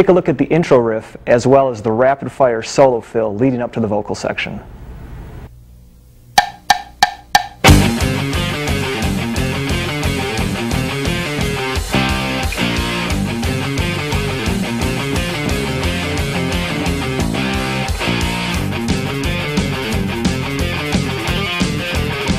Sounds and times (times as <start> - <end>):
Speech: 0.0 - 4.7
Strum: 6.4 - 22.3
Electric guitar: 7.6 - 22.3.